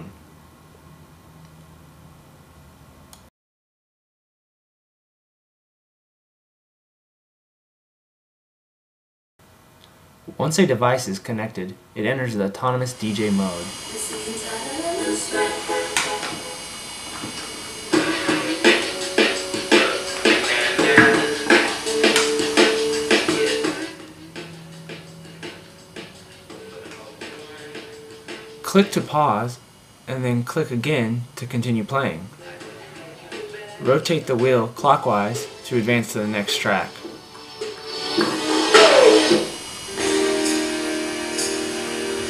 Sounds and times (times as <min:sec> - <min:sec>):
Music: 0:13.7 - 0:29.1, 0:32.4 - 0:42.3.